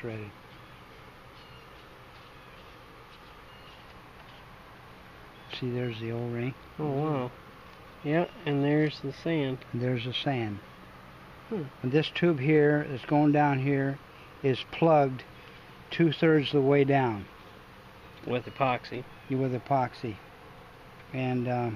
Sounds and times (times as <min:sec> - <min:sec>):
Speech: 0:00.0 - 0:00.4, 0:05.5 - 0:07.4, 0:08.0 - 0:10.6, 0:11.5 - 0:15.3, 0:16.0 - 0:17.3, 0:18.2 - 0:20.2, 0:21.1 - 0:21.7.